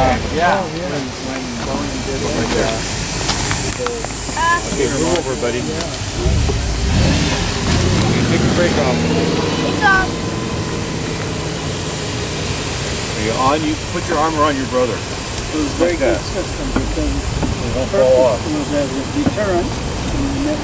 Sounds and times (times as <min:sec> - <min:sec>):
Speech: 0:00.0 - 0:02.9, 0:03.7 - 0:06.4, 0:07.7 - 0:10.1, 0:13.2 - 0:20.6
Heavy engine (low frequency): 0:00.0 - 0:20.6
Hiss: 0:00.0 - 0:20.6.